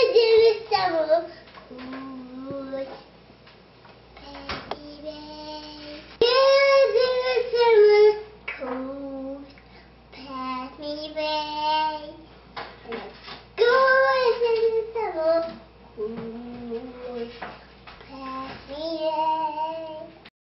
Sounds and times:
Child singing: 0:00.0 - 0:03.1, 0:04.2 - 0:09.6, 0:10.2 - 0:12.3, 0:12.9 - 0:20.3.

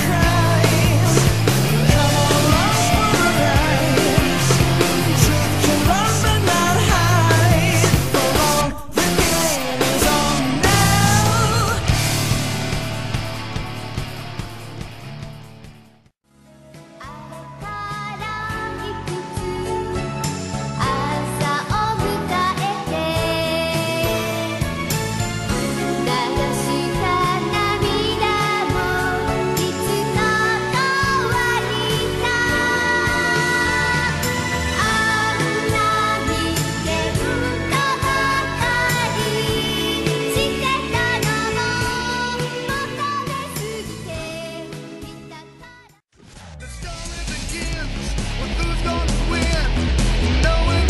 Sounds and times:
Jingle (music): 0:00.0 - 0:15.5, 0:16.6 - 0:45.8.

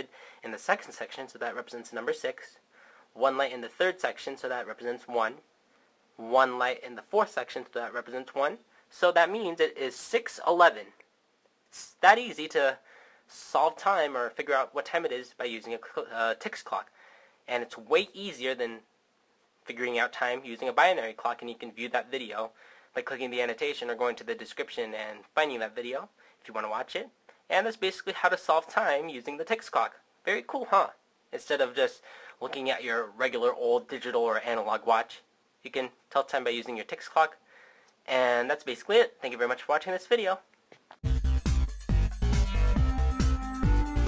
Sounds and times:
Speech: 0:00.0 - 0:02.6, 0:03.2 - 0:05.5, 0:06.2 - 0:11.1, 0:11.7 - 0:16.9, 0:17.5 - 0:18.9, 0:19.6 - 0:37.4, 0:38.0 - 0:40.5.

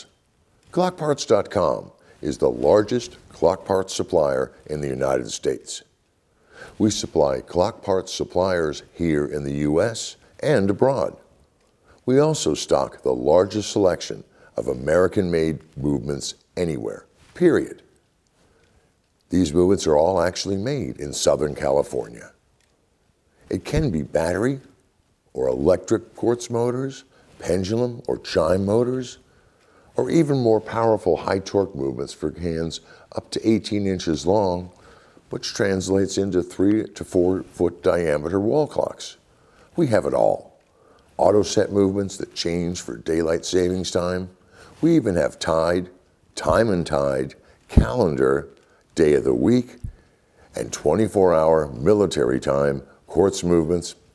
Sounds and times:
Speech: 0:00.0 - 0:06.0, 0:06.7 - 0:11.3, 0:12.0 - 0:18.0, 0:19.3 - 0:22.4, 0:23.4 - 0:29.3, 0:29.9 - 0:54.1.

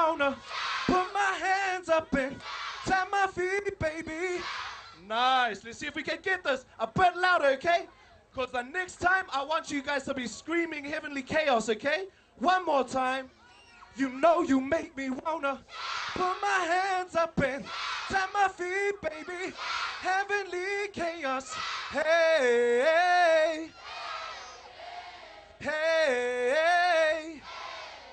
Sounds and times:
Speech: 0:05.0 - 0:15.6.

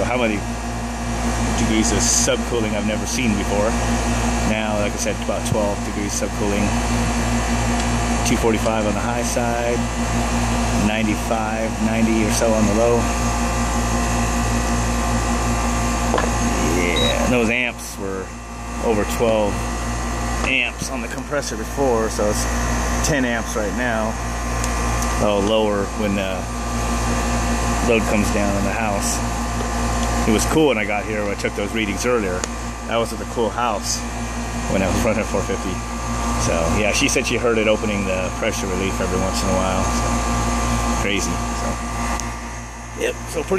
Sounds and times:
Speech: 0:00.0 - 0:00.5, 0:01.5 - 0:03.8, 0:04.4 - 0:06.8, 0:08.2 - 0:09.9, 0:10.8 - 0:13.1, 0:16.5 - 0:19.6, 0:20.5 - 0:24.2, 0:25.1 - 0:26.5, 0:27.8 - 0:29.2, 0:30.2 - 0:34.0, 0:34.7 - 0:35.8, 0:36.4 - 0:40.1, 0:41.0 - 0:41.8, 0:43.0 - 0:43.5
Outside, urban or manmade: 0:00.0 - 0:43.5.

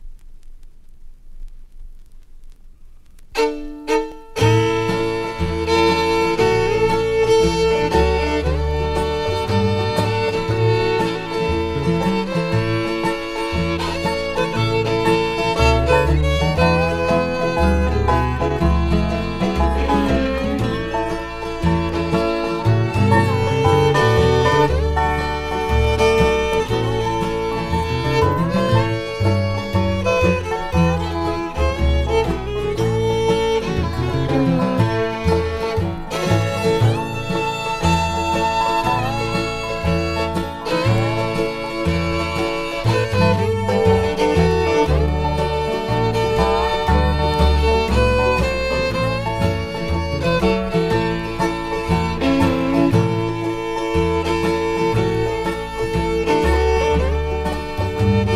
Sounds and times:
Bluegrass: 0:00.0 - 0:58.3
Violin, fiddle: 0:03.4 - 0:58.3.

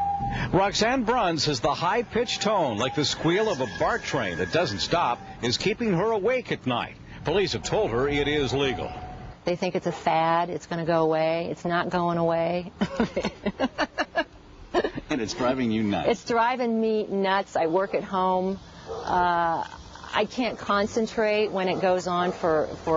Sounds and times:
Conversation: 0:00.5 - 0:22.9.

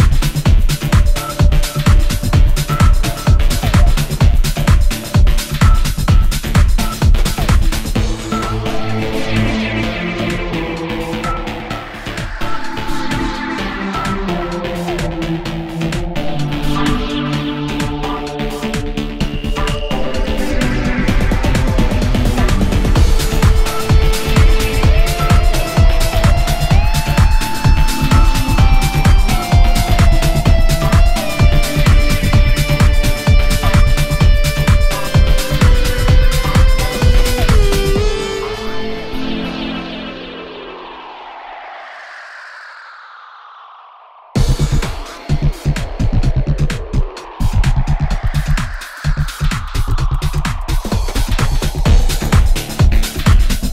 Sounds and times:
Music: 0:00.0 - 0:41.8, 0:44.4 - 0:53.7.

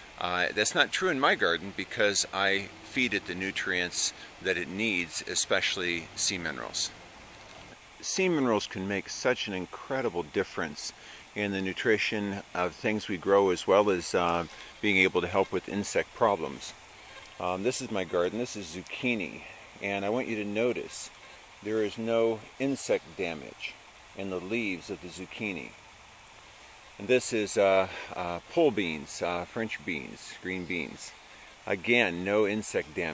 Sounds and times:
Speech: 0:00.2 - 0:07.0, 0:08.0 - 0:16.8, 0:17.4 - 0:25.8, 0:27.0 - 0:33.1.

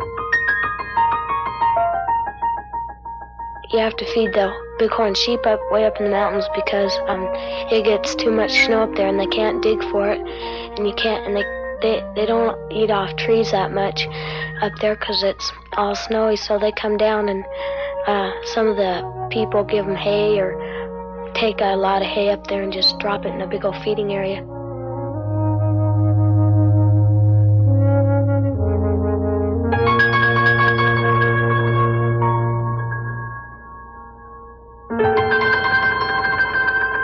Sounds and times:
Music: 0:00.0 - 0:37.0
Speech: 0:03.7 - 0:24.4.

